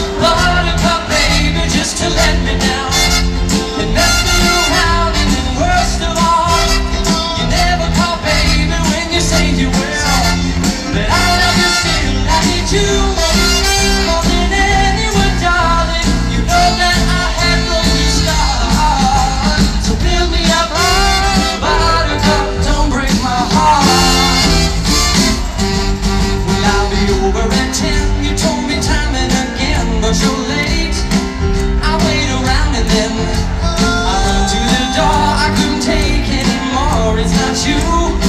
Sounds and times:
Music: 0.0s - 38.2s.

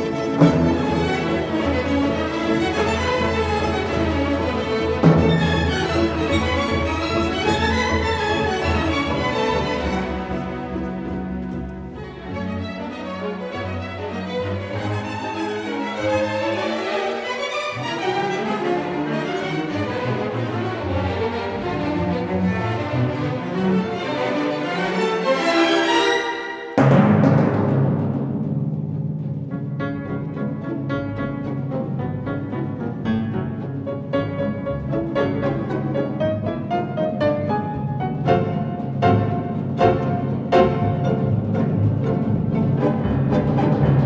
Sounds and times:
Percussion: 0.0s - 44.0s.

